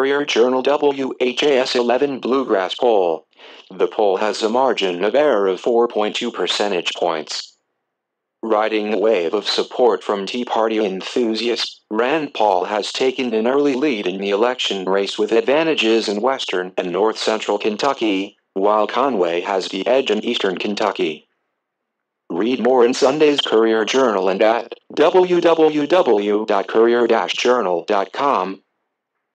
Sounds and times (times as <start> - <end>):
Speech: 0.0 - 7.5, 8.4 - 21.2, 22.3 - 28.6.